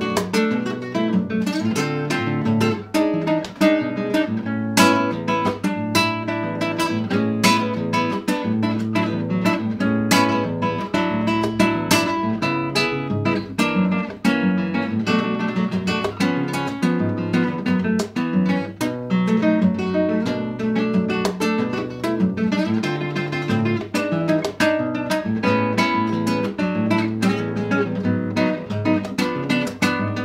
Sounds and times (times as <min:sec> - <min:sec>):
Acoustic guitar: 0:00.0 - 0:30.2
Electric guitar: 0:00.0 - 0:30.2
Strum: 0:00.0 - 0:30.2.